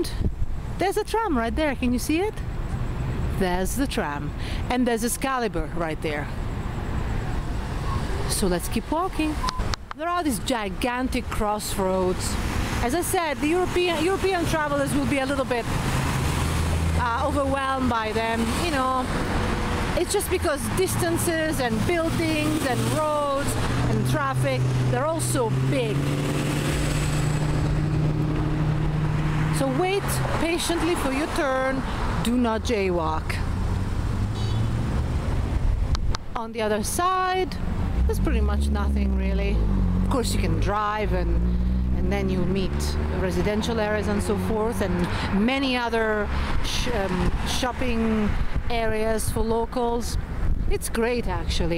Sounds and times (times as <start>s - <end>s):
Vehicle: 0.0s - 51.7s
Speech: 0.8s - 2.4s, 3.3s - 6.3s, 8.3s - 9.4s, 10.0s - 15.7s, 17.0s - 19.1s, 20.0s - 26.0s, 29.6s - 33.4s, 36.4s - 41.4s, 42.0s - 51.7s.